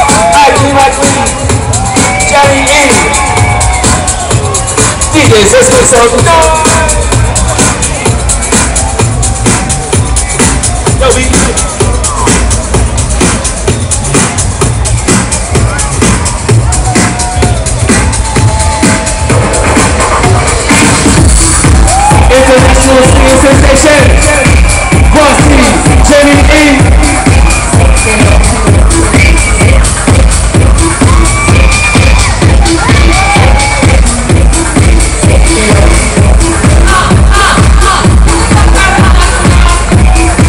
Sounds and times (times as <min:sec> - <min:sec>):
Techno: 0:00.0 - 0:40.4.